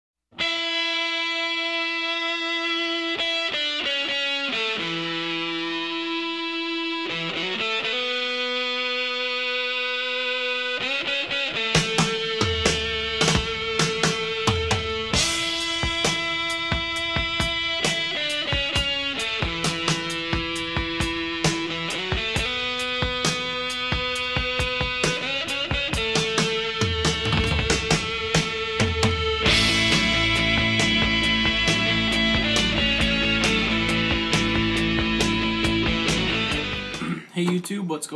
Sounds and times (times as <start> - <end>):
Electric guitar: 0.4 - 37.2.